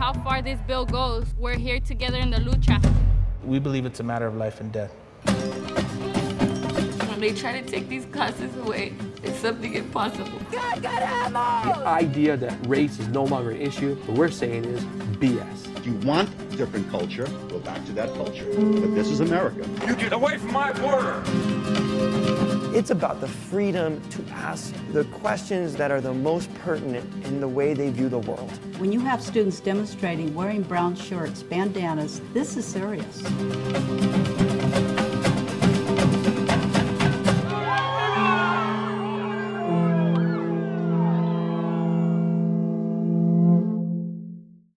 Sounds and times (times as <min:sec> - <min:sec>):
Guitar: 0:05.2 - 0:43.8
Electronic tuner: 0:38.8 - 0:44.7.